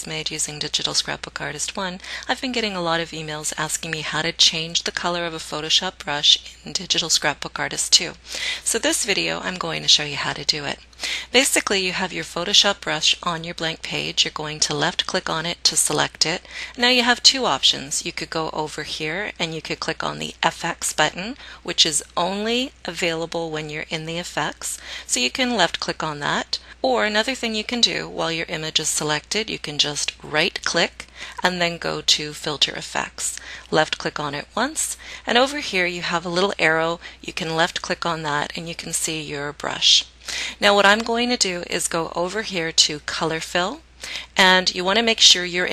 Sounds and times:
Speech: 0.0s - 45.7s.

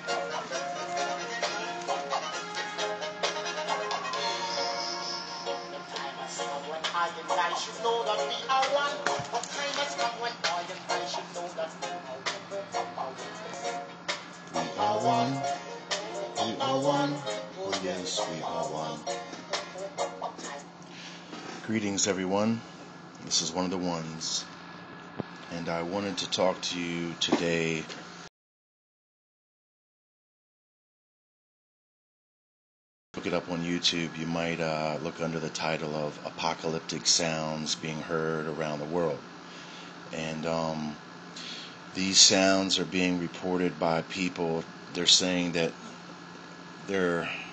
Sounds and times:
Speech: 21.6s - 24.5s, 25.5s - 28.0s, 33.2s - 39.2s, 40.2s - 41.0s, 42.0s - 45.8s, 46.9s - 47.4s.

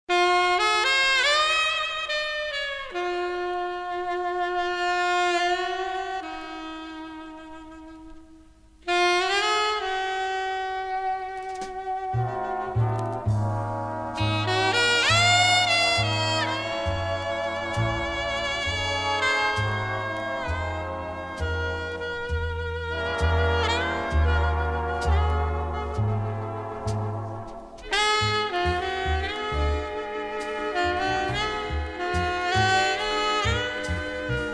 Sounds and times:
Music: 0.1s - 34.5s.

